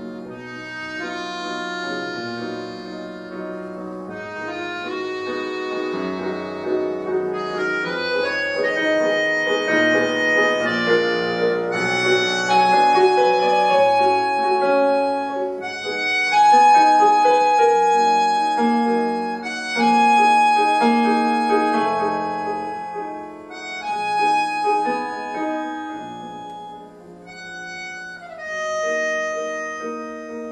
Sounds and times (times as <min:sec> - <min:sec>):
Keyboard (musical): 0:00.0 - 0:30.5.